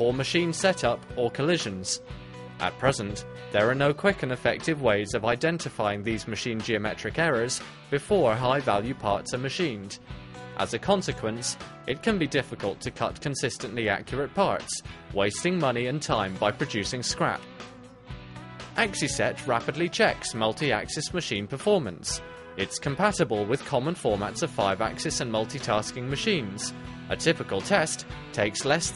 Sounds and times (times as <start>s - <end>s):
Speech: 0.0s - 2.0s, 2.6s - 10.0s, 10.6s - 17.4s, 18.8s - 28.9s
Music: 0.0s - 28.9s.